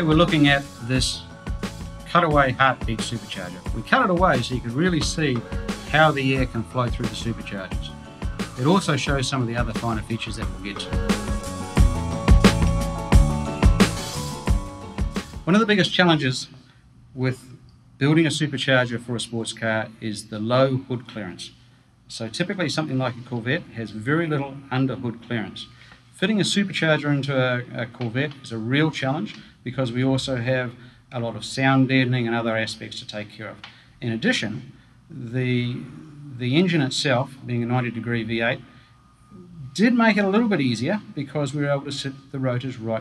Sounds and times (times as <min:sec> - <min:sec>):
Speech: 0:00.0 - 0:01.2, 0:02.1 - 0:07.9, 0:08.6 - 0:11.1, 0:15.5 - 0:16.6, 0:17.2 - 0:38.6, 0:39.3 - 0:43.0
Music: 0:00.0 - 0:15.8, 0:37.8 - 0:43.0.